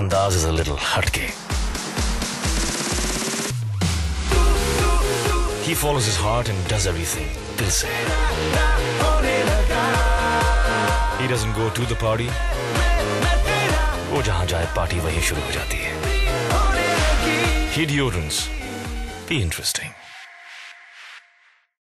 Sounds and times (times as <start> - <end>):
Speech: 0.0 - 1.4, 5.6 - 8.0, 11.2 - 12.4, 14.1 - 16.0, 17.7 - 18.6, 19.3 - 20.0
Music: 0.0 - 21.8.